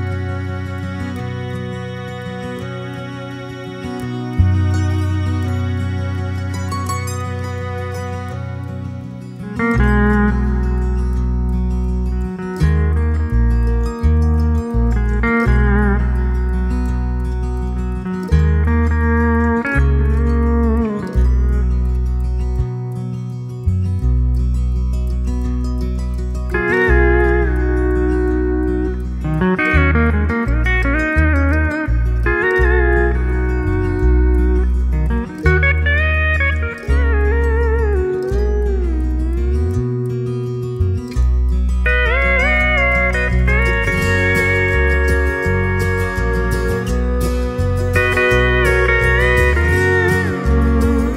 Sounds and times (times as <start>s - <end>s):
Steel guitar, slide guitar: 0.0s - 51.1s.